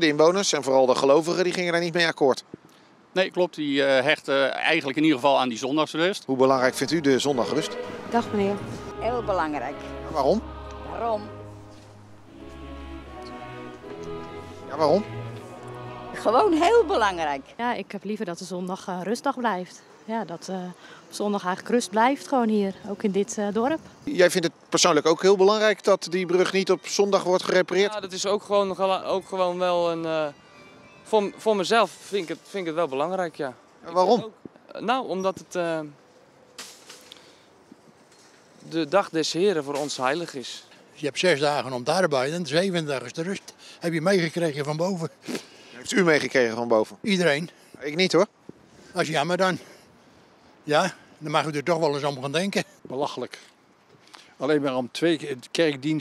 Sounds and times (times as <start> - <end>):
Music: 6.5 - 17.9, 28.7 - 32.8.